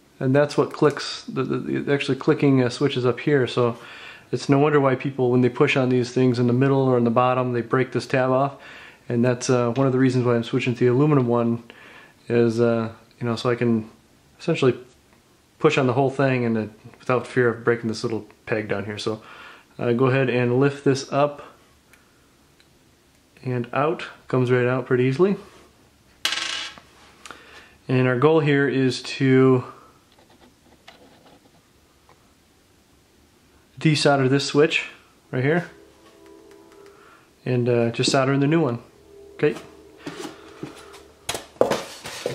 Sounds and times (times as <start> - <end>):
Inside, small room: 0.0 - 42.3
Speech: 0.2 - 14.9, 15.6 - 19.2, 19.8 - 21.6, 23.4 - 25.5, 27.9 - 29.8, 33.8 - 35.8, 37.4 - 39.7.